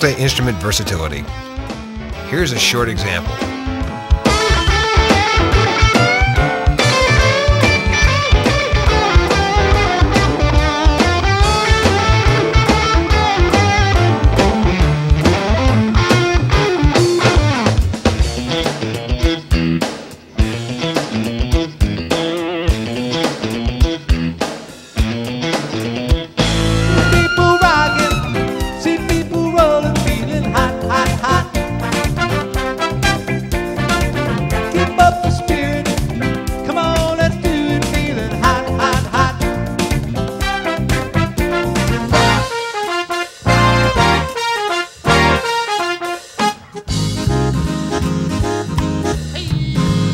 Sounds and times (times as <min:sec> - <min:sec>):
Happy music: 0:00.0 - 0:50.1
Dance music: 0:26.5 - 0:39.6.